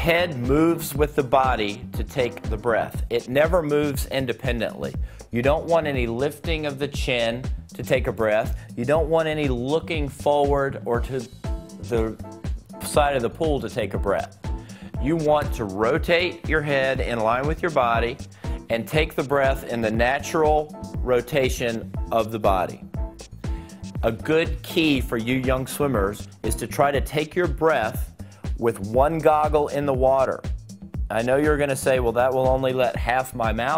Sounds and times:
Speech: 0.0 - 14.4, 15.0 - 22.8, 24.0 - 30.4, 31.1 - 33.7
Music: 0.0 - 33.7.

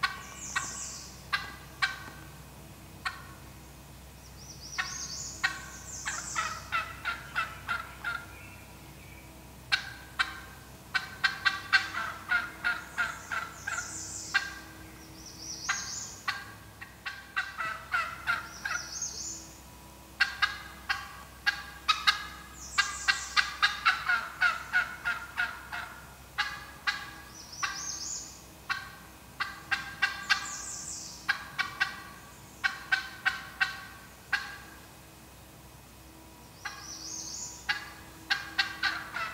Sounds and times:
Gobble: 0.0 - 2.3, 3.0 - 3.4, 4.8 - 8.4, 9.7 - 14.7, 15.7 - 19.0, 20.2 - 27.9, 28.7 - 30.6, 31.3 - 34.8, 36.6 - 36.9, 37.6 - 39.3.

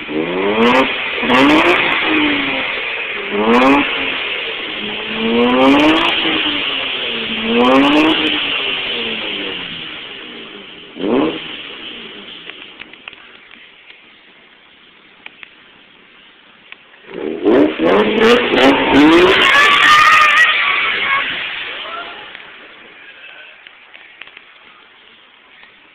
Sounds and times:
Accelerating, revving, vroom: 0.0 - 2.7, 3.3 - 4.2, 5.0 - 6.7, 7.3 - 9.5, 11.0 - 11.6, 17.1 - 20.2
Car: 0.0 - 25.9.

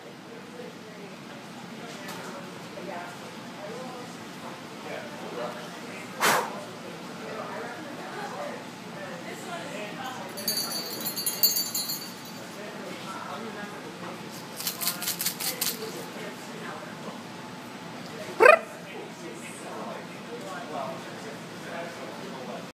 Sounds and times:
Speech: 0.0 - 11.8, 12.4 - 17.3, 18.0 - 22.7
Rattle: 10.4 - 12.4, 14.6 - 15.8.

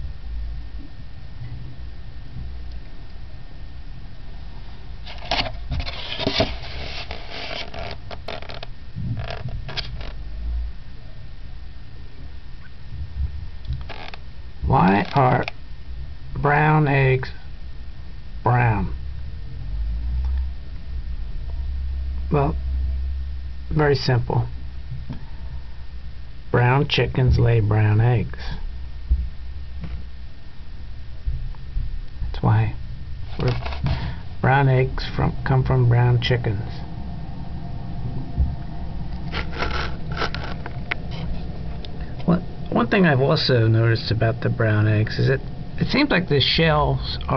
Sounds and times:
Speech: 14.6 - 15.6, 16.4 - 17.4, 18.4 - 19.0, 22.3 - 22.6, 23.7 - 24.5, 26.5 - 28.6, 32.3 - 32.8, 33.4 - 33.8, 34.4 - 36.9, 42.2 - 47.3.

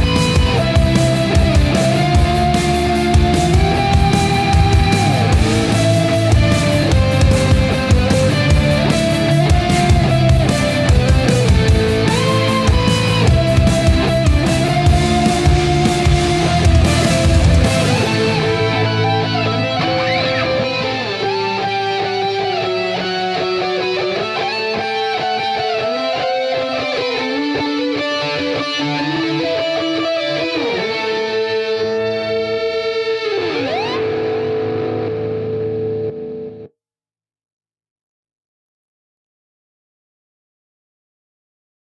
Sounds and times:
Effects unit: 0.0 - 36.7
Music: 0.0 - 36.7.

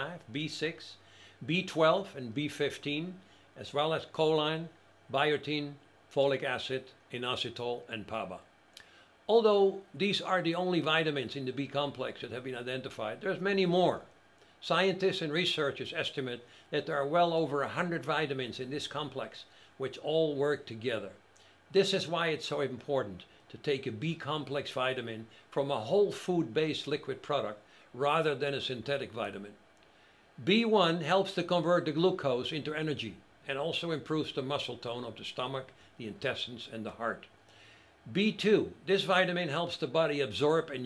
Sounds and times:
Speech: 0.0 - 8.5, 9.3 - 29.6, 30.4 - 37.3, 38.1 - 40.8.

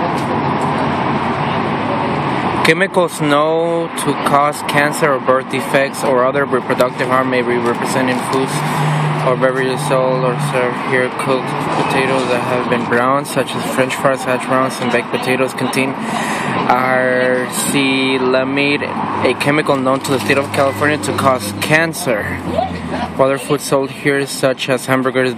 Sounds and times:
Speech: 1.4 - 25.3.

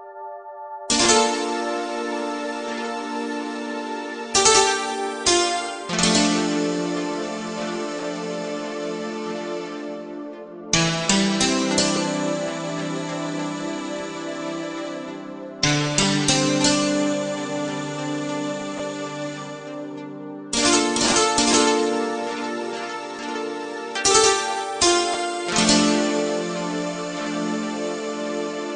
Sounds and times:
Music: 0.0 - 28.7.

